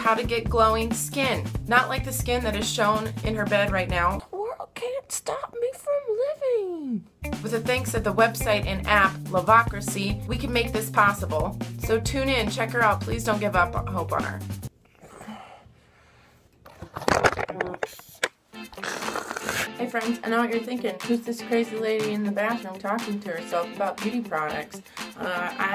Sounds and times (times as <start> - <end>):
Music: 0.0 - 4.2, 7.2 - 14.7, 18.5 - 25.7
Speech: 0.0 - 14.4, 19.8 - 25.7
Inside, small room: 0.0 - 25.7.